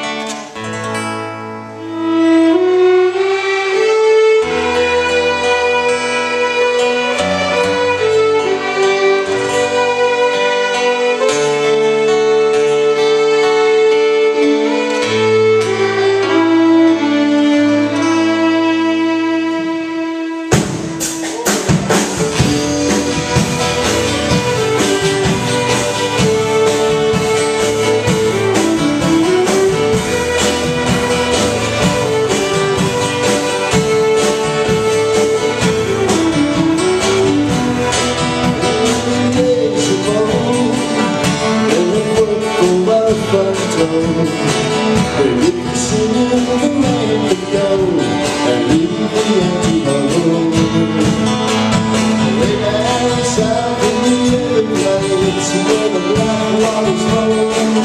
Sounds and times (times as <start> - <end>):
Violin, fiddle: 0.0 - 0.9, 1.6 - 57.8.